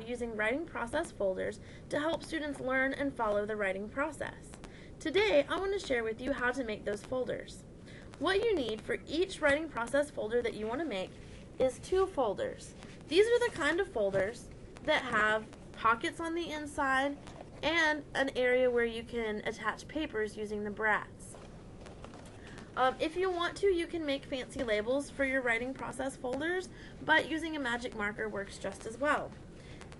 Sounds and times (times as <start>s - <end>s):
Speech: 0.0s - 7.6s, 8.2s - 21.4s, 22.8s - 29.4s.